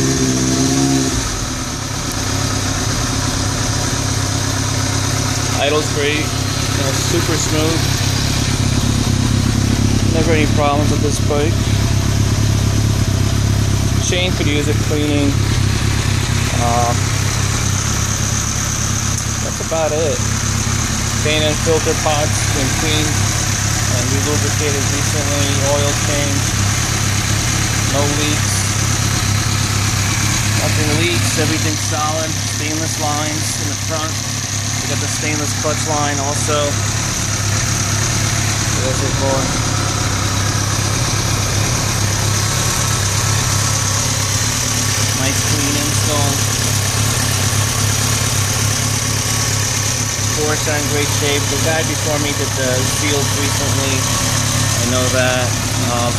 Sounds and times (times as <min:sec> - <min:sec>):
Motorcycle: 0:00.0 - 0:56.1
Vibration: 0:00.0 - 0:56.1
Speech: 0:05.5 - 0:07.9, 0:10.1 - 0:11.7, 0:14.0 - 0:15.4, 0:16.6 - 0:17.0, 0:19.4 - 0:20.3, 0:21.2 - 0:23.2, 0:23.9 - 0:26.5, 0:27.9 - 0:28.7, 0:30.6 - 0:34.2, 0:34.8 - 0:36.8, 0:38.8 - 0:39.6, 0:45.2 - 0:46.5, 0:50.3 - 0:54.1, 0:54.8 - 0:56.1.